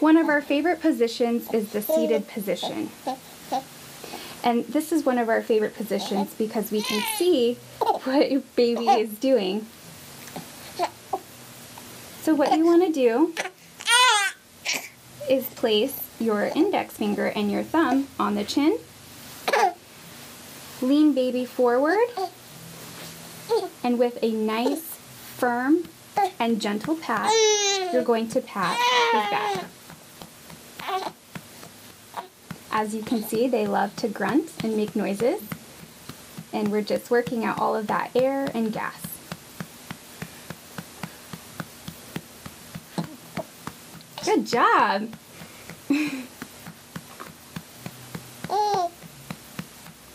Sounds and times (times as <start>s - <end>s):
Speech: 0.0s - 3.0s, 4.4s - 9.7s, 12.2s - 13.4s, 15.2s - 18.9s, 20.8s - 22.3s, 23.8s - 29.7s, 32.7s - 35.6s, 36.5s - 39.2s, 44.2s - 45.2s.